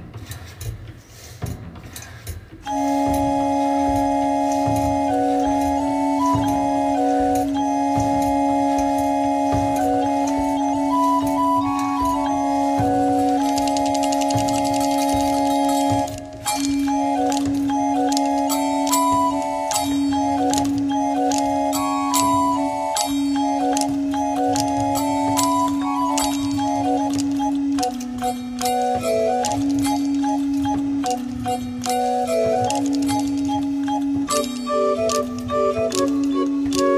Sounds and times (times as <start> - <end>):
Independent music: 2.6 - 36.9.